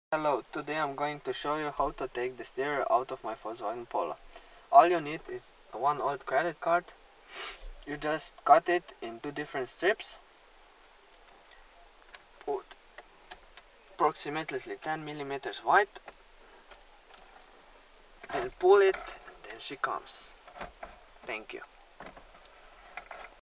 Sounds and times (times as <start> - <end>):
Speech: 0.1 - 7.0, 7.9 - 10.2, 12.4 - 12.8, 14.0 - 16.1, 18.3 - 20.4, 21.3 - 21.7.